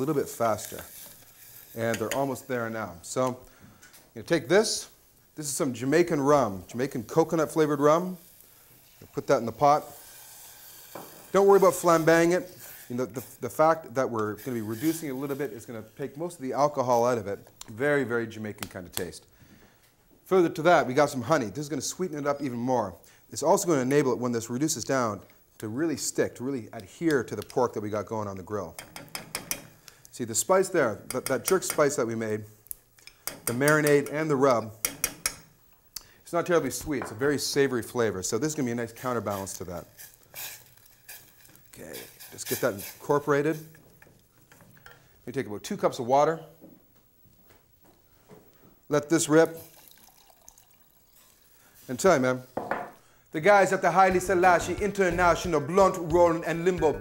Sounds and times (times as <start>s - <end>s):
Speech: 0.0s - 0.9s, 1.8s - 3.4s, 4.2s - 8.2s, 9.1s - 10.0s, 11.4s - 19.3s, 20.3s - 28.8s, 30.2s - 32.5s, 33.5s - 34.8s, 36.3s - 39.9s, 41.7s - 43.7s, 45.3s - 46.6s, 48.9s - 49.6s, 51.9s - 52.5s, 53.4s - 57.0s
Water: 49.7s - 51.4s
Music: 54.1s - 57.0s.